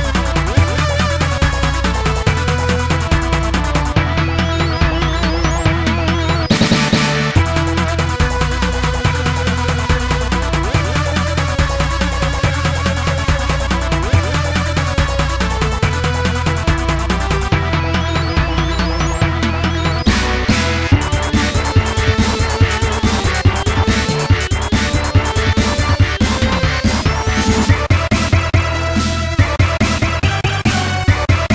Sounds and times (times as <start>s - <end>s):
Video game music: 0.0s - 31.5s.